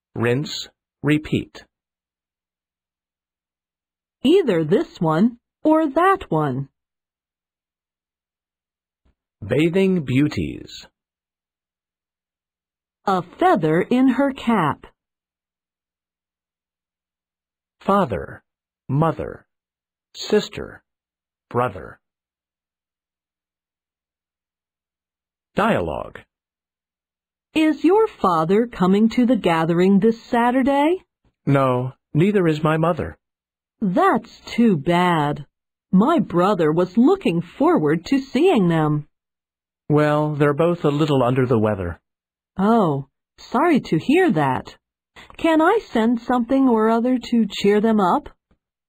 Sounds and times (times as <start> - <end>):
Speech synthesizer: 0.2 - 1.7, 4.2 - 6.7, 9.4 - 10.9, 13.1 - 14.9, 17.8 - 19.5, 20.2 - 20.8, 21.5 - 22.0, 25.6 - 26.2, 27.6 - 33.2, 33.8 - 39.1, 39.9 - 42.0, 42.6 - 48.4.